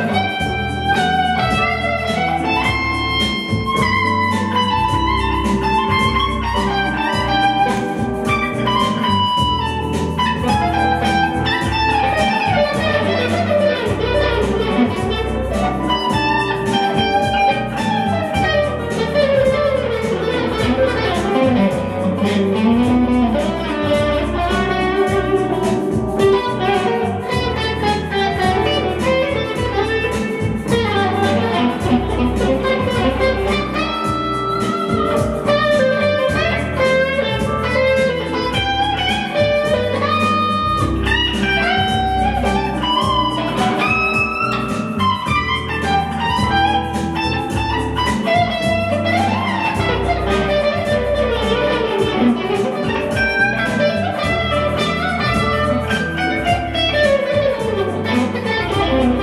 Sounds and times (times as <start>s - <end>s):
Electric guitar: 0.0s - 59.2s.